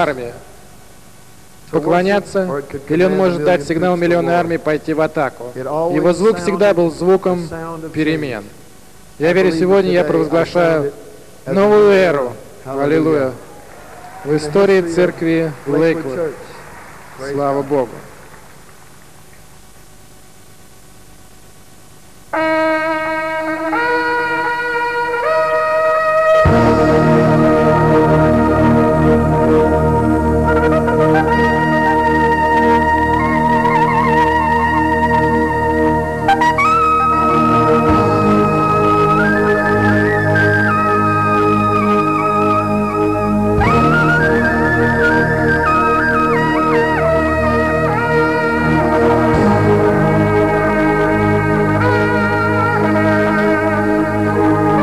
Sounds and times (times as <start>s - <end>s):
Speech: 0.0s - 0.4s, 1.7s - 8.6s, 9.2s - 13.4s, 14.3s - 16.6s, 17.2s - 18.0s.